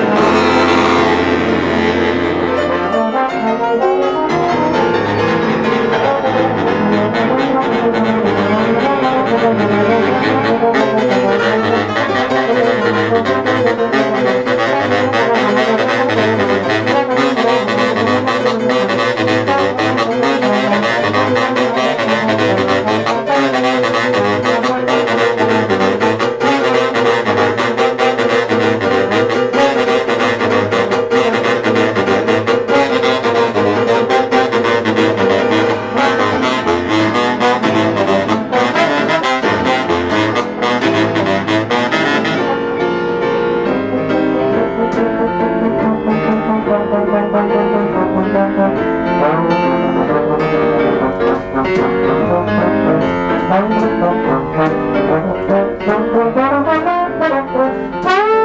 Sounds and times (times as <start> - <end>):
Jazz: 0.0 - 58.4
Piano: 0.0 - 58.4
Saxophone: 0.0 - 58.4.